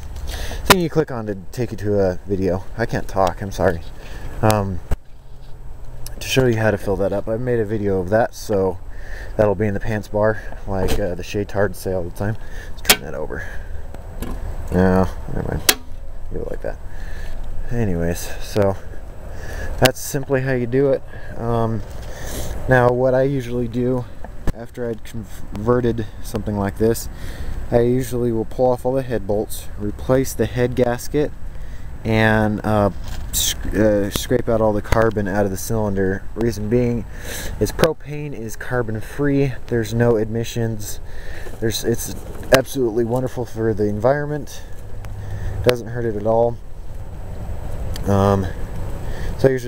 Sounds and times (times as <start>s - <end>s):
Speech: 0.6s - 4.8s, 6.1s - 8.8s, 9.4s - 13.6s, 14.7s - 15.7s, 16.3s - 16.8s, 17.6s - 18.9s, 19.8s - 21.8s, 22.6s - 27.1s, 27.7s - 31.3s, 32.0s - 41.0s, 41.6s - 44.7s, 45.6s - 46.6s, 48.0s - 48.6s, 49.4s - 49.6s.